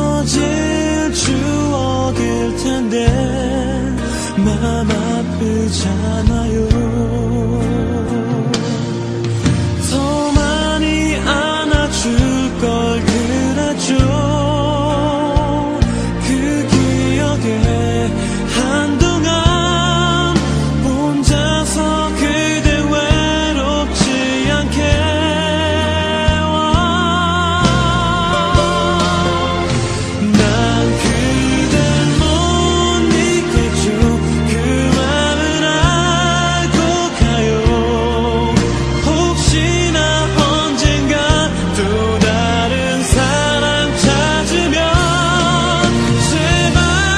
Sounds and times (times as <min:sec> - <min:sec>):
Music: 0:00.0 - 0:47.1.